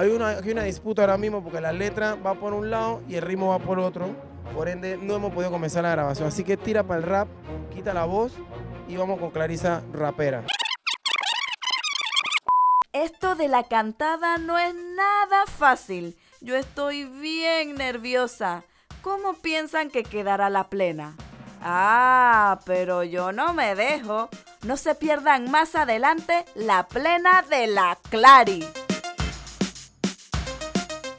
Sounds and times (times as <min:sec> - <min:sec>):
Speech: 0:00.0 - 0:10.4, 0:13.0 - 0:28.7
Music: 0:00.0 - 0:10.5, 0:12.9 - 0:31.1.